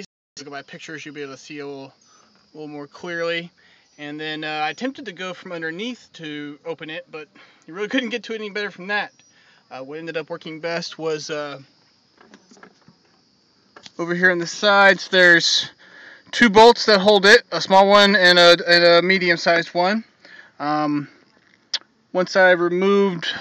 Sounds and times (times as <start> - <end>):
Speech: 0.0 - 2.0, 2.6 - 9.1, 9.7 - 11.7, 14.0 - 21.1, 22.2 - 23.4.